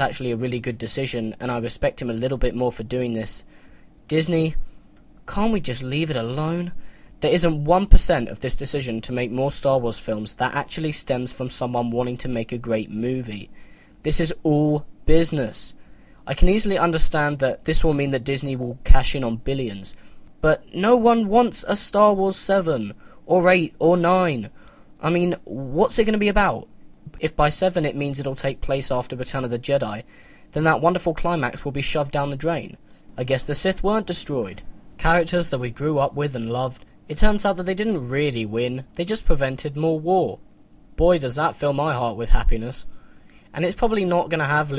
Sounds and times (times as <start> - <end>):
Narration, monologue: 0.0 - 44.7.